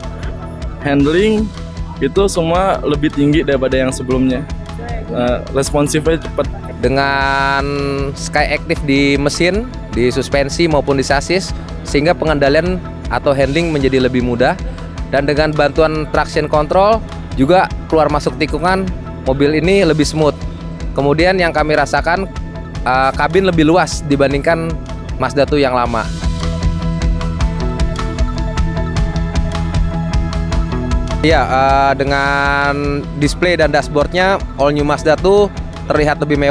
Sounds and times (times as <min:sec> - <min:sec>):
Music: 0:00.0 - 0:36.5.